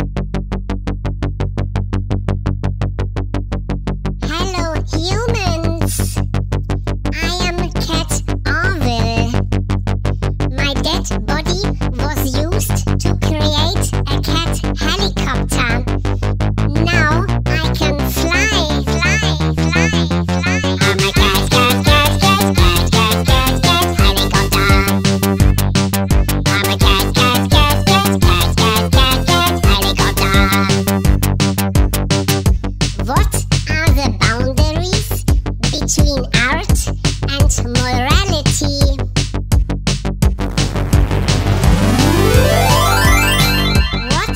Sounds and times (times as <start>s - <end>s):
Music: 0.0s - 44.3s
Speech: 4.2s - 6.3s, 7.1s - 9.4s, 10.5s - 15.9s, 16.7s - 25.0s, 26.5s - 27.8s, 29.7s - 30.8s, 33.0s - 39.1s, 44.0s - 44.3s.